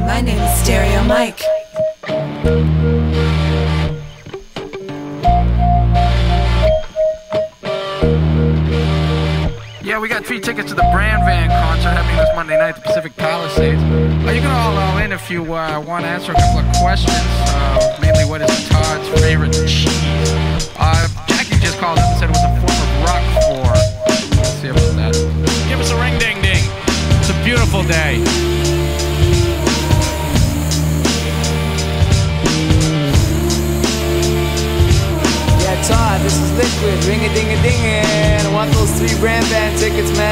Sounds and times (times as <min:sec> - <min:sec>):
Speech: 0:00.0 - 0:01.5, 0:09.8 - 0:28.3, 0:35.6 - 0:40.3
Music: 0:00.0 - 0:40.3.